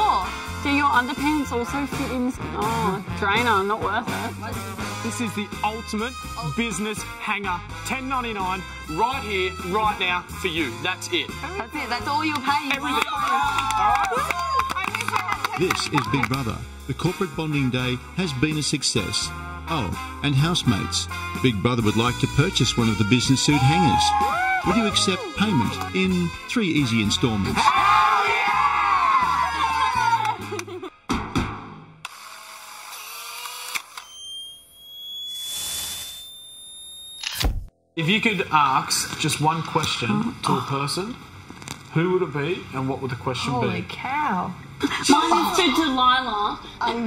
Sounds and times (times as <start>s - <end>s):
Music: 0.0s - 32.0s
Speech: 15.6s - 24.1s, 24.7s - 27.6s, 38.0s - 40.8s.